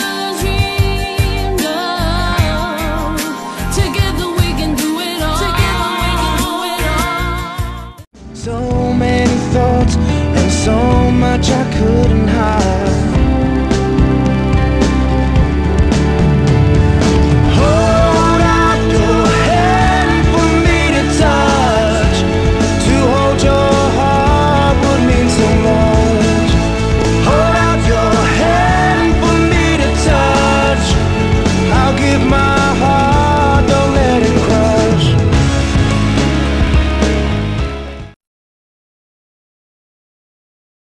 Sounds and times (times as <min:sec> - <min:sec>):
Independent music: 0:00.0 - 0:38.2
Pop music: 0:00.0 - 0:38.2
Singing: 0:17.5 - 0:26.6, 0:27.2 - 0:31.1.